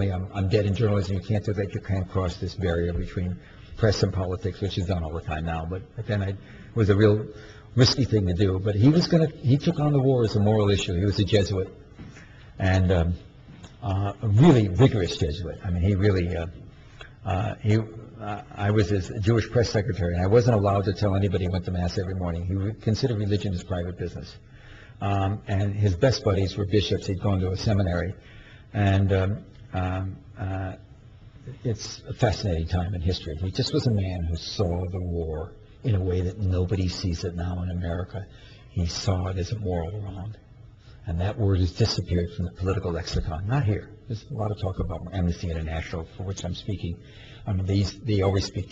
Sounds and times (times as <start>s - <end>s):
Male speech, man speaking: 0.0s - 11.8s, 12.6s - 16.6s, 17.2s - 24.4s, 25.0s - 28.2s, 28.8s - 30.8s, 31.5s - 40.4s, 41.0s - 48.7s
Narration, monologue: 0.0s - 48.7s.